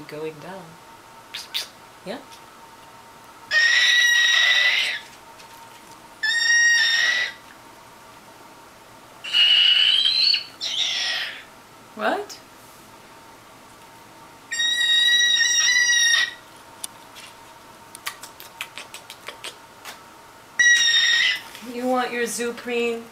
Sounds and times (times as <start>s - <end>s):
Speech: 0.0s - 0.8s, 2.0s - 2.4s, 12.0s - 12.5s, 21.6s - 23.1s
Inside, small room: 0.0s - 23.1s
Domestic animals, pets: 3.5s - 5.2s, 6.2s - 7.6s, 9.2s - 11.5s, 14.5s - 16.5s, 20.6s - 21.6s
Bird: 9.3s - 11.5s, 14.5s - 16.4s, 20.6s - 21.5s.